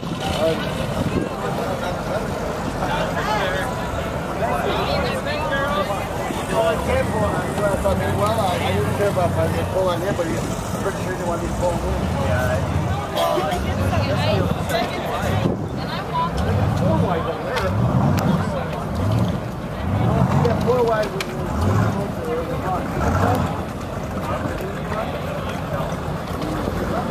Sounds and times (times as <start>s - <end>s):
Speech: 0.0s - 27.1s.